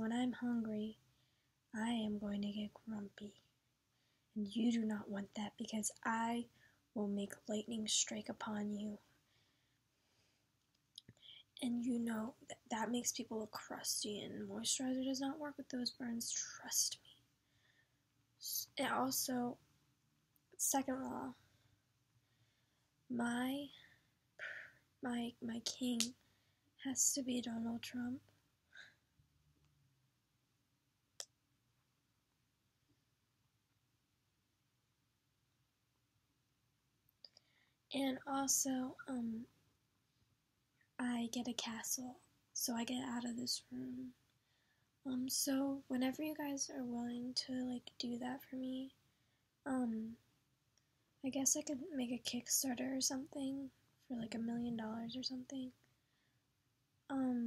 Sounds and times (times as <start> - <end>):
Speech: 0.0 - 1.0, 1.7 - 3.5, 4.4 - 9.1, 11.6 - 17.1, 18.4 - 19.6, 20.6 - 21.4, 23.1 - 23.8, 24.4 - 26.2, 26.8 - 28.3, 37.9 - 39.5, 41.0 - 44.2, 45.1 - 49.0, 49.7 - 50.2, 51.2 - 55.8, 57.1 - 57.4
Inside, small room: 0.0 - 57.4.